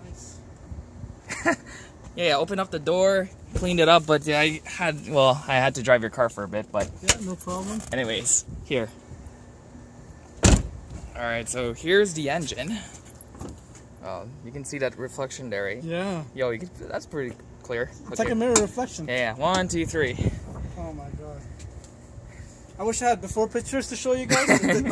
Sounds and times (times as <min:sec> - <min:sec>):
Car: 0:00.0 - 0:19.6.